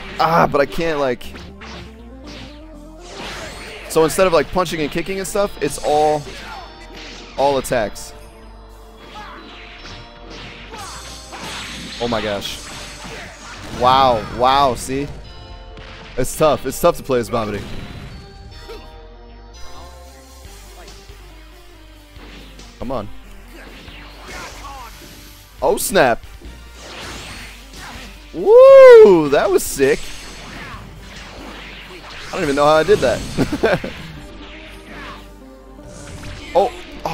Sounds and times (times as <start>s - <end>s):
Music: 0.0s - 37.1s
Speech: 0.2s - 1.2s, 3.9s - 6.3s, 13.8s - 15.1s, 16.2s - 17.6s, 29.0s - 30.0s, 32.3s - 33.2s
Smash, crash: 1.4s - 4.1s, 10.4s - 15.1s.